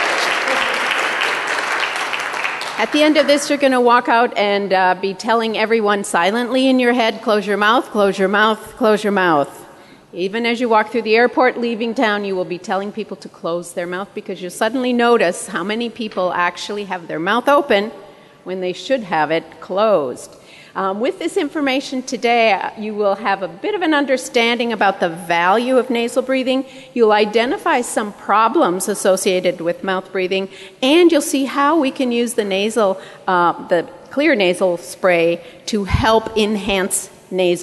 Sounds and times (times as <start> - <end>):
Speech: 2.8 - 9.6, 10.2 - 37.6.